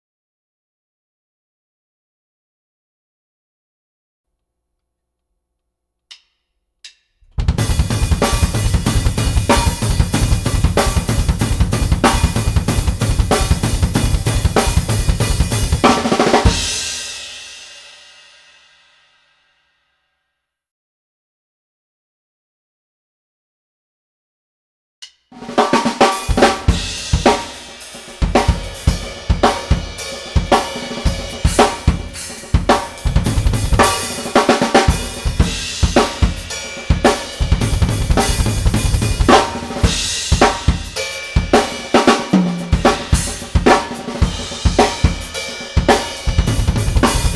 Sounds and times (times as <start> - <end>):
Bass drum: 7.2 - 16.9, 26.3 - 27.6, 28.2 - 41.7, 42.4 - 47.3.